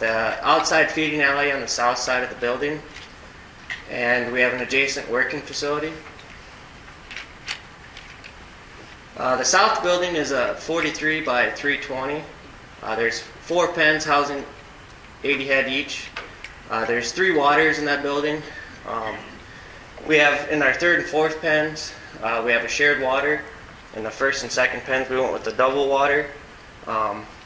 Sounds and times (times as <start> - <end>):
Speech: 0.0 - 2.9, 3.9 - 6.1, 9.2 - 14.6, 15.2 - 19.4, 20.0 - 27.3.